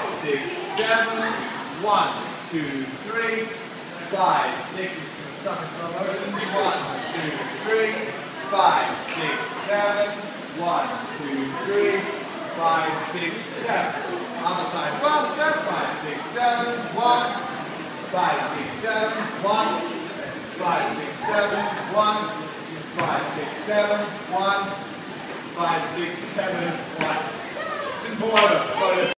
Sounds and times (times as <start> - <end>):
Speech: 0.0 - 24.9, 25.5 - 29.1.